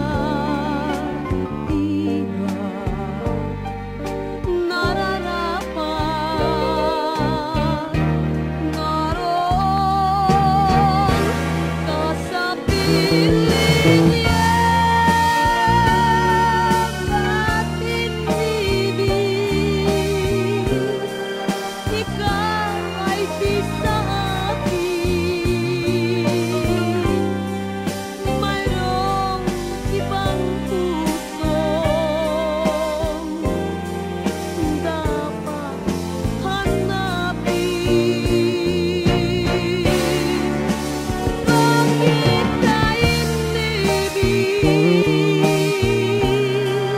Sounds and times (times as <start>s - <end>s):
Music: 0.0s - 46.9s.